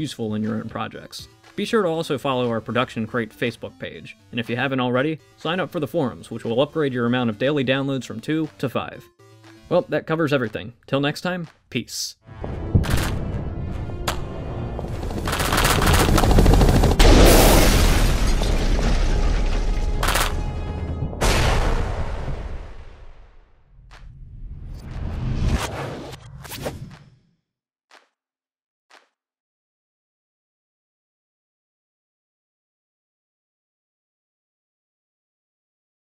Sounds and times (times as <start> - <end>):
Music: 0.0 - 17.1, 18.6 - 22.7
Boom: 12.4 - 14.9, 17.0 - 23.6.